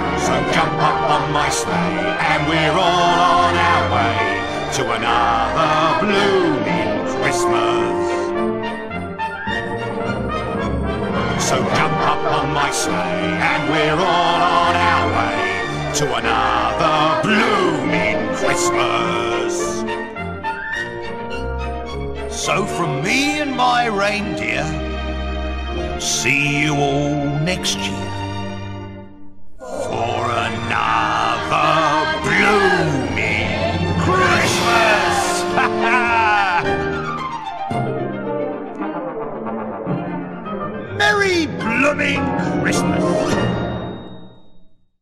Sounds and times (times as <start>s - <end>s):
Christian music: 0.0s - 44.1s
Christmas music: 0.0s - 44.9s.